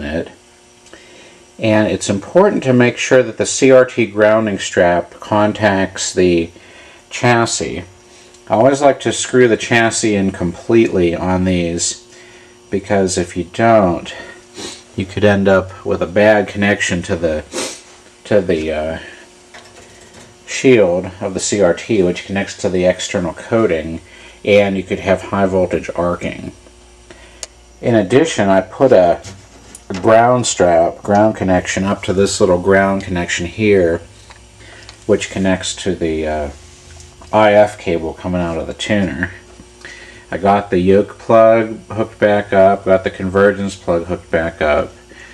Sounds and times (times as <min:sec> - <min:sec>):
Speech: 0:00.0 - 0:00.4, 0:01.6 - 0:07.9, 0:08.5 - 0:12.1, 0:12.7 - 0:17.6, 0:18.2 - 0:19.2, 0:20.5 - 0:26.7, 0:27.8 - 0:34.1, 0:35.1 - 0:36.6, 0:37.3 - 0:39.5, 0:40.3 - 0:45.0.